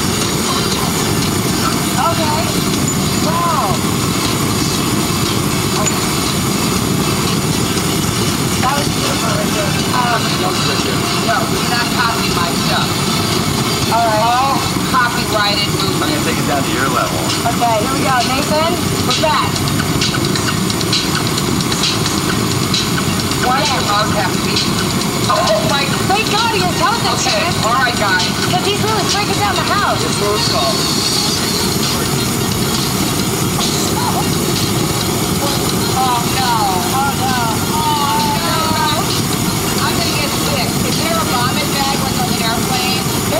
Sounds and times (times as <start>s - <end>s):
Speech: 0.0s - 3.9s, 8.6s - 13.1s, 13.8s - 19.6s, 23.4s - 32.5s, 33.6s - 34.5s, 35.4s - 43.3s.